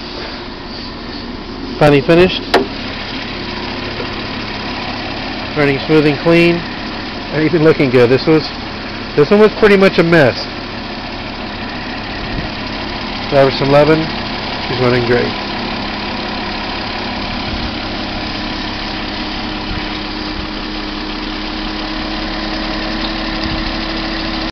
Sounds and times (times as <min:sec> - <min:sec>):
Engine: 0:00.0 - 0:24.5
Vehicle: 0:00.0 - 0:24.5
Speech: 0:01.8 - 0:02.4, 0:05.6 - 0:06.7, 0:07.3 - 0:08.6, 0:09.2 - 0:10.5, 0:13.3 - 0:14.1, 0:14.7 - 0:15.4.